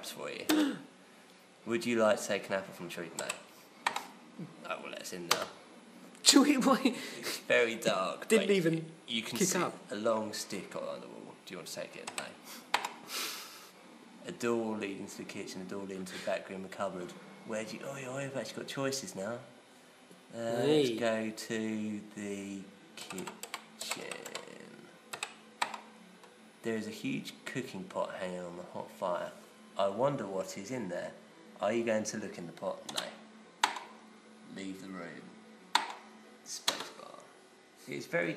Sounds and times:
Speech: 0.0 - 0.8, 1.6 - 3.4, 4.6 - 5.6, 6.2 - 12.4, 14.2 - 19.5, 20.3 - 24.9, 26.6 - 33.2, 37.9 - 38.3.

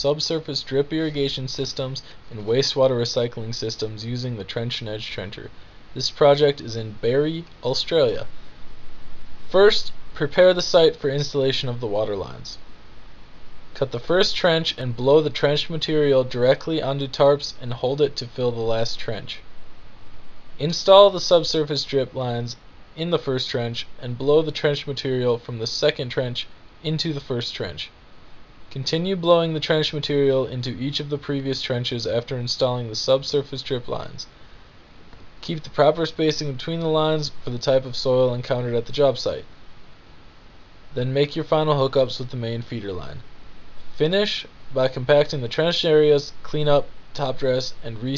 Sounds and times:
Speech: 0.0 - 8.3, 9.5 - 12.7, 13.8 - 19.5, 20.6 - 28.0, 28.7 - 34.4, 35.4 - 39.5, 40.9 - 43.3, 44.0 - 48.1.

